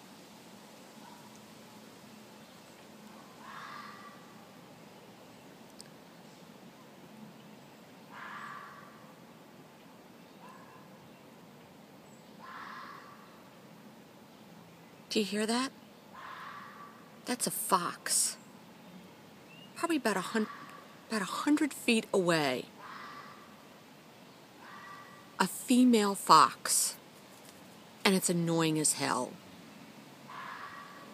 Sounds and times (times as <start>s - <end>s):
Speech: 15.1s - 15.8s, 17.3s - 18.4s, 19.8s - 22.7s, 25.4s - 27.0s, 28.1s - 29.4s.